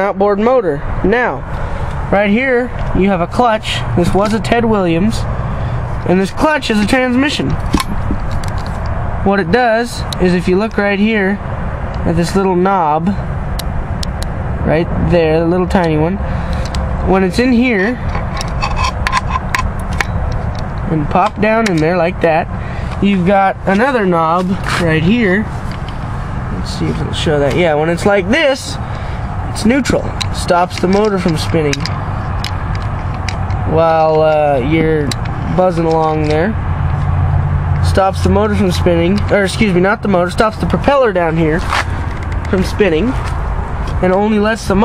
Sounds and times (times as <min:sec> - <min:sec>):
Speech: 0:00.0 - 0:01.4, 0:02.1 - 0:05.3, 0:06.0 - 0:07.6, 0:09.2 - 0:11.4, 0:12.0 - 0:13.2, 0:14.6 - 0:16.2, 0:17.1 - 0:18.0, 0:20.9 - 0:25.5, 0:26.5 - 0:28.8, 0:29.5 - 0:31.9, 0:33.7 - 0:36.6, 0:37.8 - 0:41.7, 0:42.5 - 0:43.2, 0:44.0 - 0:44.8
Heavy engine (low frequency): 0:00.0 - 0:44.8.